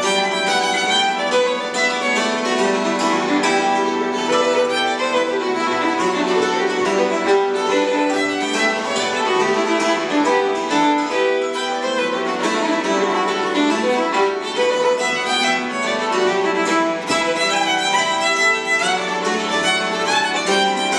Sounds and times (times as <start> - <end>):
Violin, fiddle: 0.0 - 20.9.